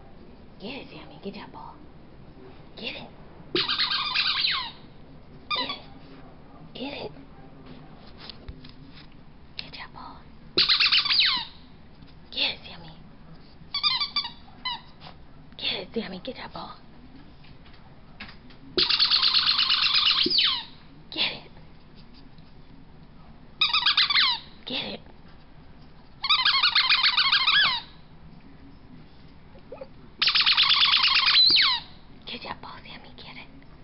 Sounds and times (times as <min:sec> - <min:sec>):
Speech: 0:05.3 - 0:09.0, 0:14.4 - 0:18.8, 0:24.6 - 0:25.1.